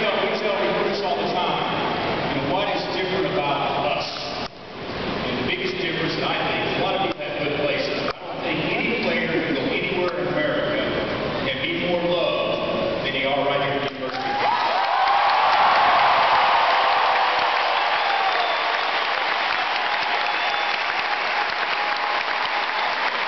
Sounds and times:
Male speech, man speaking: 0:00.0 - 0:04.2, 0:05.3 - 0:14.2
Narration, monologue: 0:00.0 - 0:14.3.

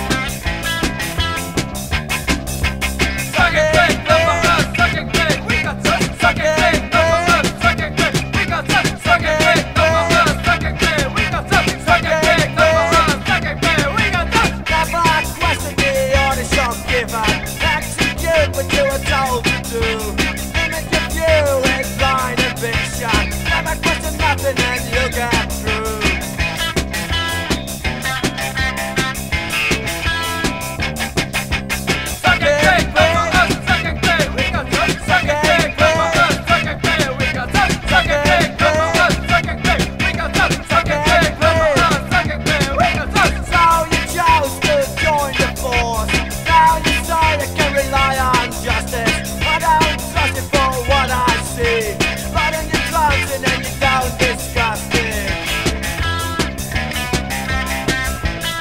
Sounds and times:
Music: 0:00.0 - 0:58.6.

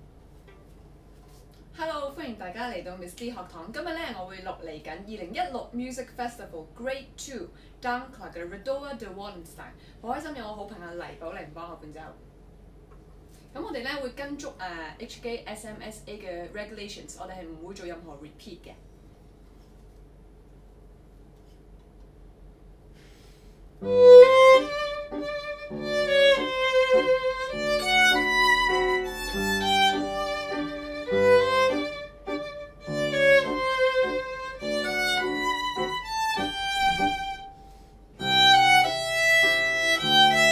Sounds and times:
Violin, fiddle: 0:23.8 - 0:37.6, 0:38.2 - 0:40.5.

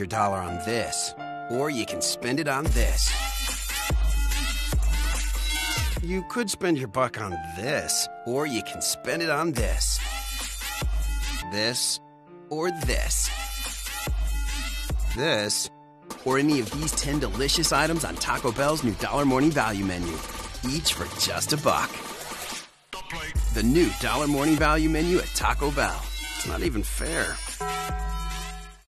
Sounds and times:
Speech: 0:00.0 - 0:03.2, 0:06.0 - 0:10.0, 0:11.5 - 0:13.4, 0:15.1 - 0:22.0, 0:23.0 - 0:27.5
Music: 0:00.0 - 0:28.9.

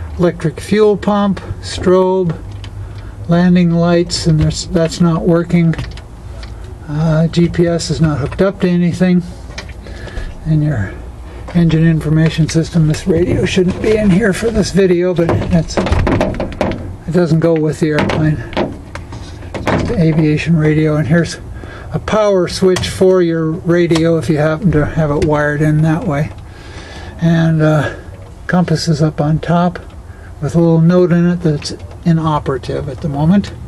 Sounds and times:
Outside, urban or manmade: 0:00.0 - 0:33.6
Speech: 0:00.2 - 0:02.4, 0:03.3 - 0:05.8, 0:06.8 - 0:09.3, 0:10.4 - 0:16.0, 0:17.1 - 0:18.5, 0:19.8 - 0:26.4, 0:27.2 - 0:33.6.

